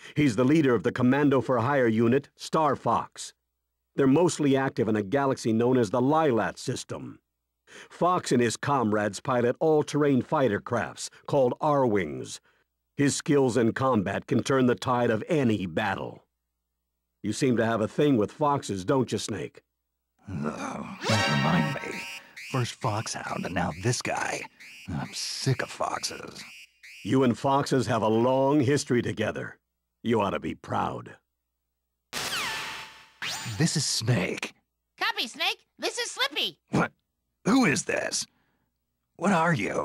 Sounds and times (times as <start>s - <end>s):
Speech: 0.1s - 3.4s, 4.0s - 7.2s, 7.8s - 12.4s, 13.0s - 16.3s, 17.2s - 19.6s, 20.2s - 26.5s, 27.1s - 31.2s, 33.5s - 38.3s, 39.2s - 39.8s.